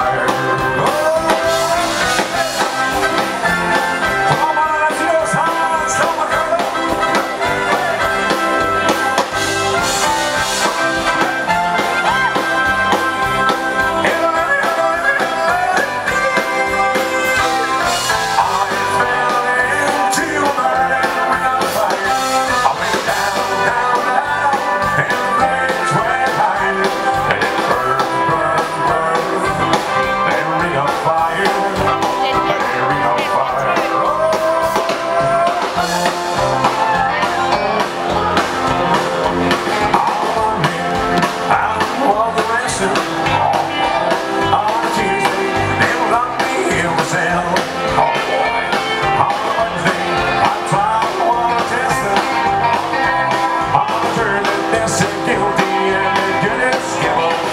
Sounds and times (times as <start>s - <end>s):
Bluegrass: 0.0s - 57.5s.